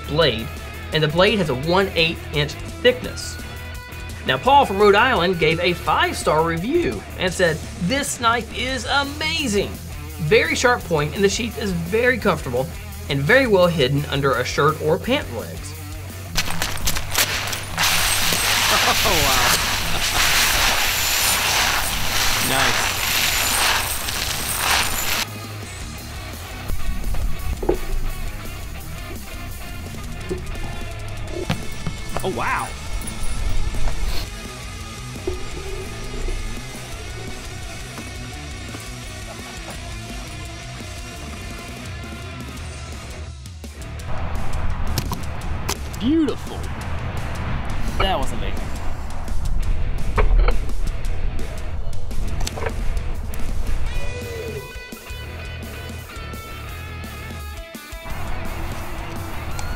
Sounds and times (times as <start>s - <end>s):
Speech: 0.0s - 3.4s, 4.3s - 15.8s, 18.6s - 19.7s, 22.4s - 22.9s, 32.2s - 32.8s, 46.0s - 46.7s, 48.0s - 48.7s
Music: 0.0s - 59.7s.